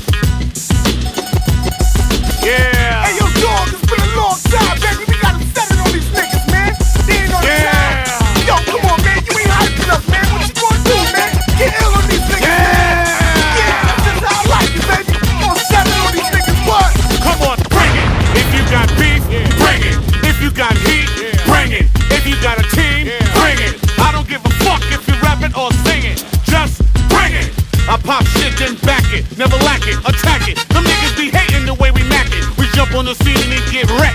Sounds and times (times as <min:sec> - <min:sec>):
Music: 0:00.0 - 0:34.1.